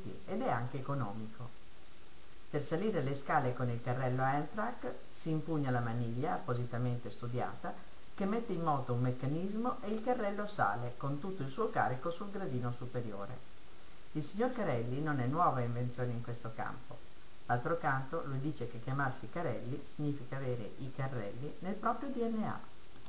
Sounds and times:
Speech: 0.0 - 1.6, 2.5 - 13.5, 14.2 - 22.7.

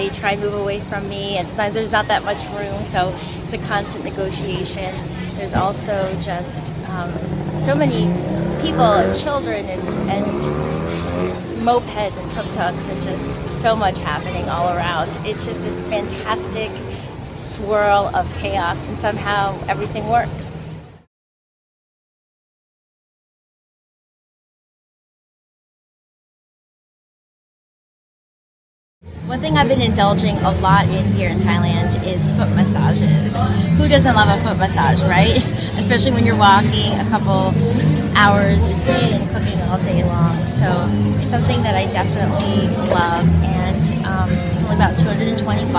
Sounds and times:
Speech: 0.0 - 20.6, 29.2 - 45.7
Outside, urban or manmade: 0.0 - 21.1, 29.0 - 45.7.

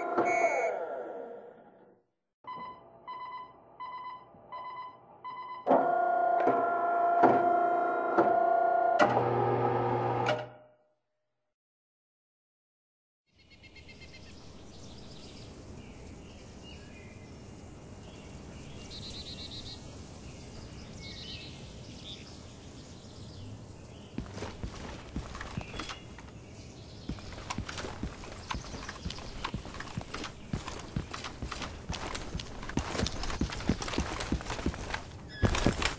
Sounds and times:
Chirp, tweet: 18.0 - 24.2.

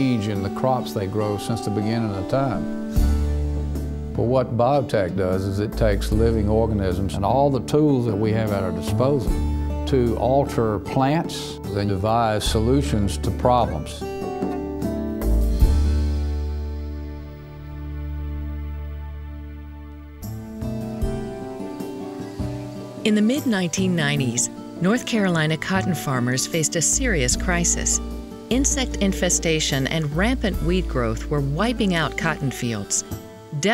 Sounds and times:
Speech: 0.0 - 2.6, 4.2 - 9.3, 9.9 - 14.0, 23.1 - 33.0
Music: 0.0 - 33.7.

